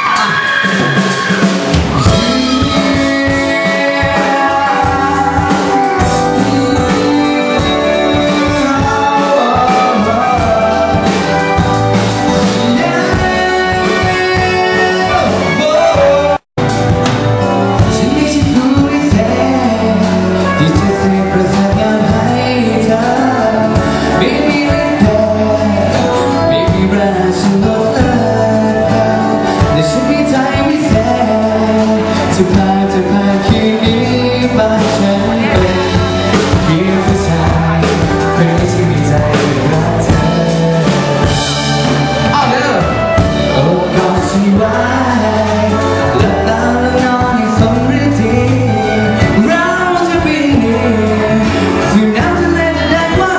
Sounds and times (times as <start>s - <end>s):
Tender music: 0.0s - 53.3s.